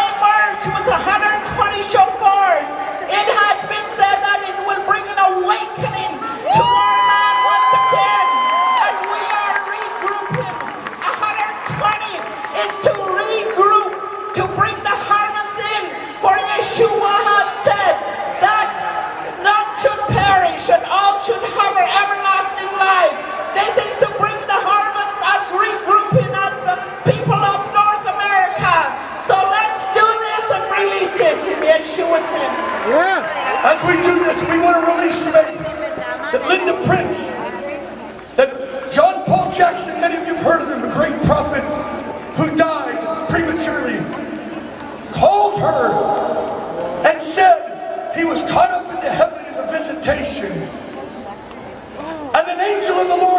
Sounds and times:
Speech: 0.0 - 41.7, 42.4 - 44.2, 47.0 - 53.3
Cheering: 0.0 - 53.3.

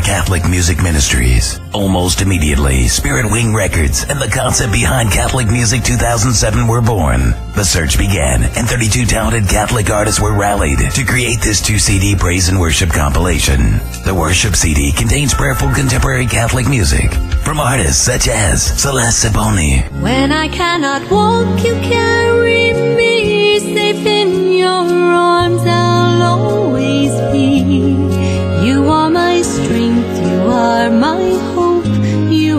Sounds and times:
Speech: 0.0 - 19.9
Music: 0.0 - 32.5.

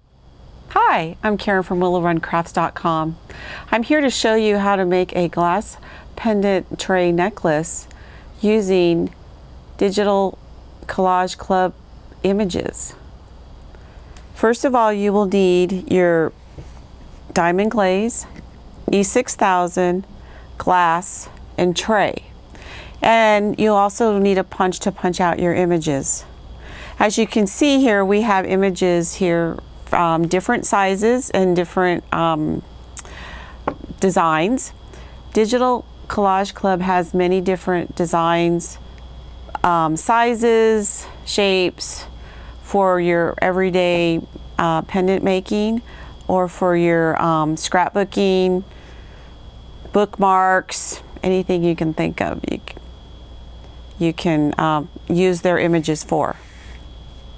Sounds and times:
Speech: 0.7 - 9.2, 9.8 - 13.0, 14.4 - 16.3, 17.3 - 18.3, 18.9 - 20.0, 20.6 - 22.3, 23.0 - 26.3, 27.0 - 32.6, 33.9 - 34.8, 35.4 - 38.8, 39.5 - 48.6, 49.9 - 52.8, 54.0 - 56.4.

